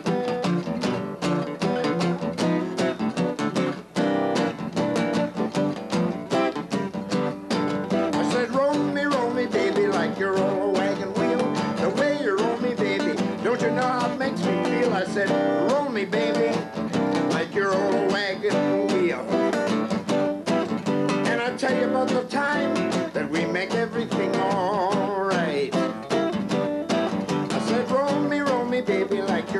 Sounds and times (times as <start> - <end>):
Blues: 0.0 - 29.5
Guitar: 0.0 - 29.5.